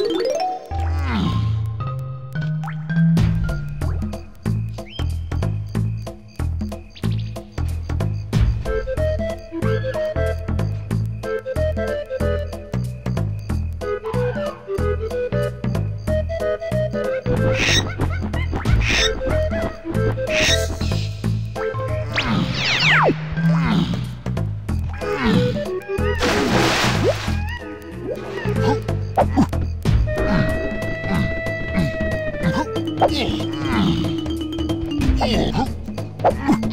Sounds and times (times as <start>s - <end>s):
Music: 0.0s - 36.7s.